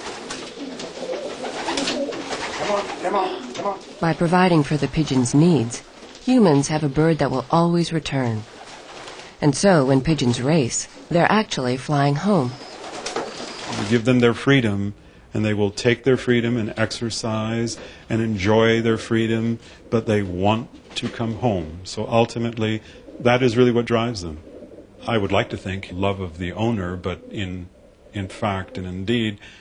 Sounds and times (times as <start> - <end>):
Pigeon, dove: 0.0 - 3.9, 12.5 - 13.9
Inside, small room: 0.0 - 29.6
Speech: 2.6 - 8.4, 9.4 - 12.6, 13.8 - 24.4, 25.0 - 29.4.